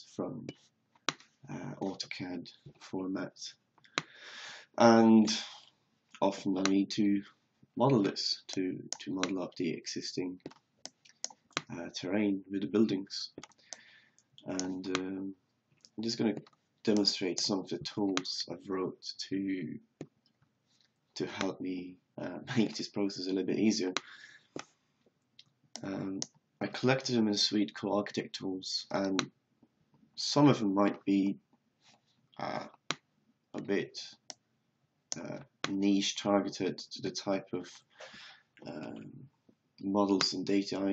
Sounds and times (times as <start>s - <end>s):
Speech: 0.0s - 0.6s, 1.5s - 3.6s, 4.6s - 10.4s, 11.7s - 13.4s, 14.4s - 19.9s, 21.2s - 24.3s, 25.8s - 29.3s, 30.2s - 31.4s, 32.4s - 32.8s, 33.6s - 34.2s, 35.2s - 37.9s, 38.6s - 40.9s.